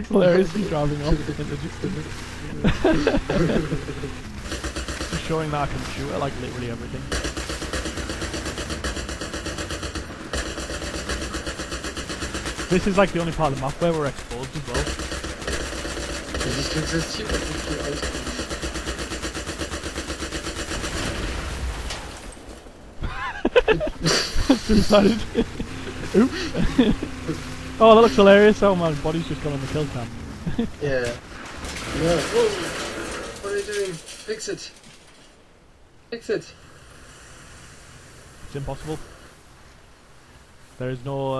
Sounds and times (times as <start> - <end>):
Speech: 0.0 - 4.0, 5.1 - 7.1, 12.7 - 14.9, 16.4 - 18.1, 24.5 - 25.5, 27.3 - 30.1, 30.8 - 31.2, 33.4 - 34.8, 38.5 - 39.0, 40.8 - 41.3.